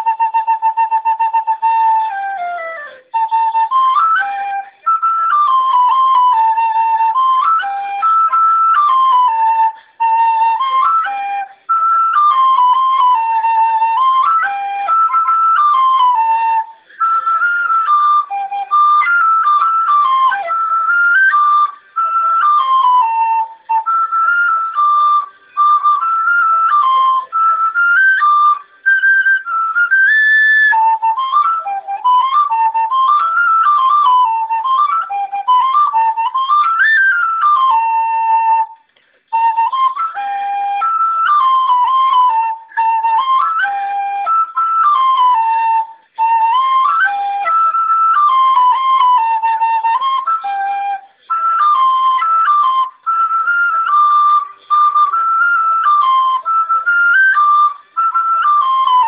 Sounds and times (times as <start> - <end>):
Flute: 0.0 - 59.0.